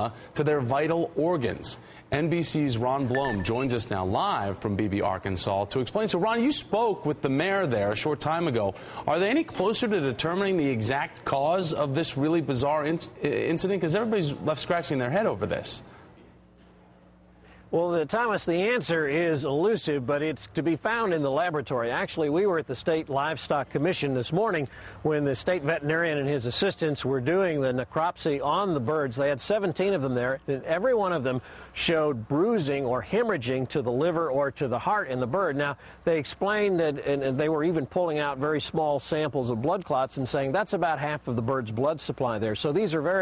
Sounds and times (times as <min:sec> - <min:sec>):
Speech: 0:00.0 - 0:15.9, 0:17.7 - 0:43.2.